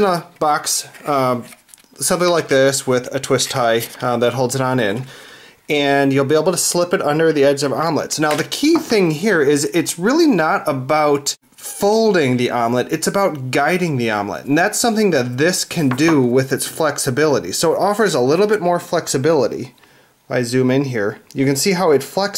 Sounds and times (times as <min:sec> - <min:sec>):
Speech: 0:00.0 - 0:05.1, 0:05.7 - 0:22.3.